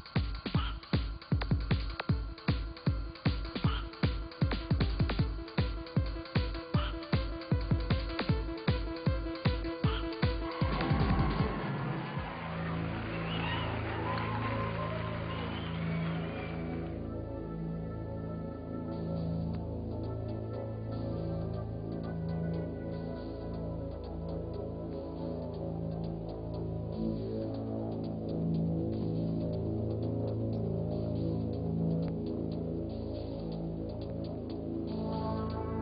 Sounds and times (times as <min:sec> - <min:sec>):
Music: 0:00.0 - 0:35.8.